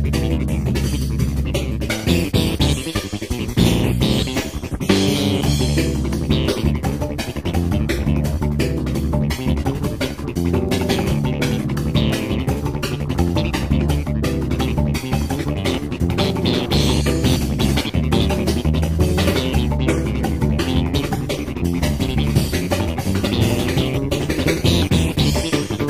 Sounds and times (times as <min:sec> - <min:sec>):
Music: 0:00.0 - 0:25.8.